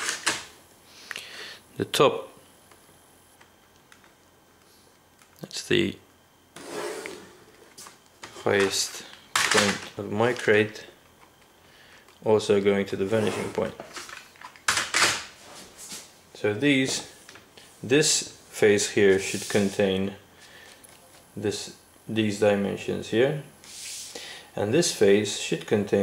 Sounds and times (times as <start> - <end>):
Speech: 1.8 - 2.4, 5.4 - 6.0, 8.4 - 11.0, 12.2 - 13.8, 16.4 - 17.1, 17.8 - 20.2, 21.4 - 23.5, 24.6 - 26.0.